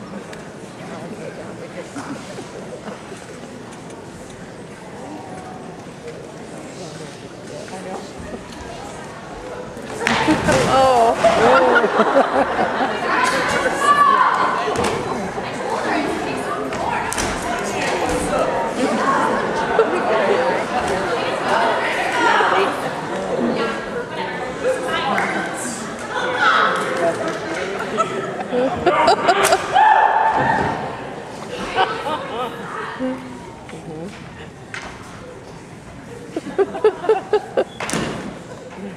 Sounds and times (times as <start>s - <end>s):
Speech: 12.6s - 29.5s.